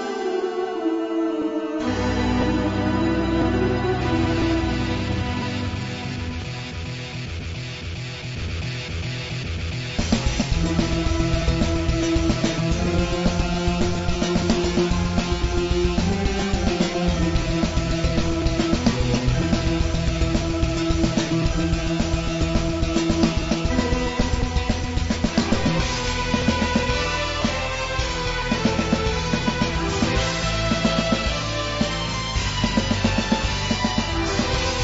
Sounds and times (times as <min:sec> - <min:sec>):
Music: 0:00.0 - 0:34.8.